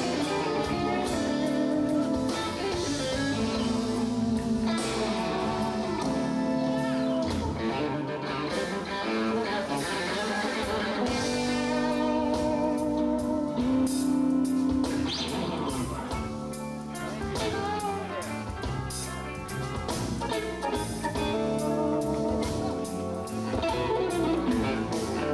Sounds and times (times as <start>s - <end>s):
Music: 0.0s - 25.3s.